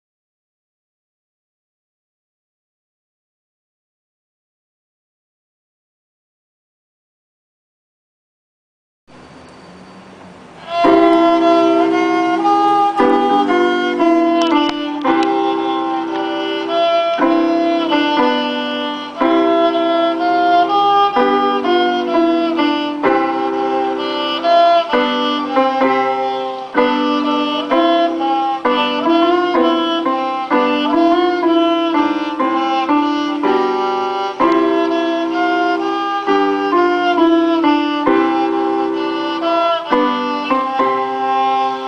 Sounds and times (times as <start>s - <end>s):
Violin, fiddle: 10.5s - 41.8s.